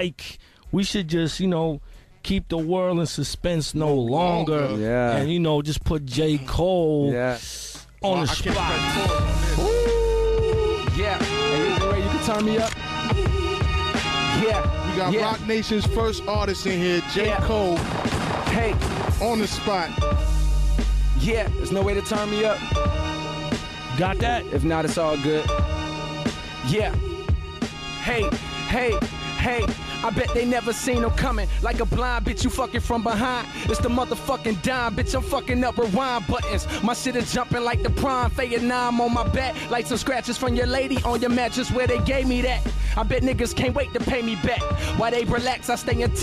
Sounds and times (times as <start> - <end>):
Music: 0.0 - 46.2.